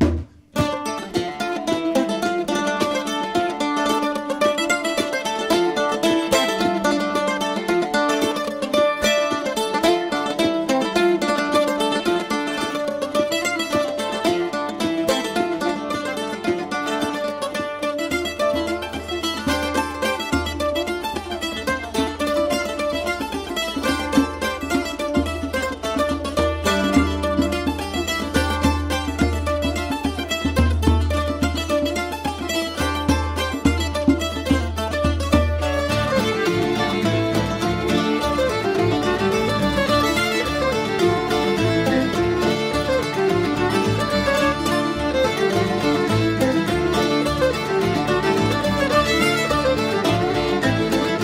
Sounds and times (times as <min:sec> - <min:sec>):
Music: 0:00.0 - 0:51.2.